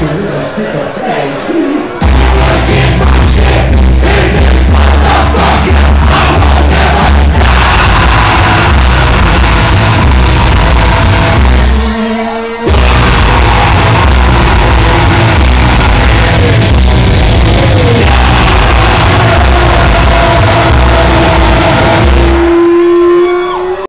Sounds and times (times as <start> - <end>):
Music: 1.9 - 23.8.